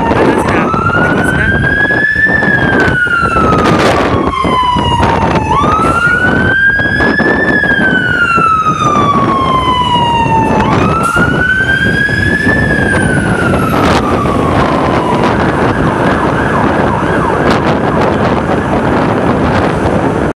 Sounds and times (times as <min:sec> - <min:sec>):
Fire engine, fire truck (siren): 0:00.0 - 0:20.3
Truck: 0:00.0 - 0:20.3.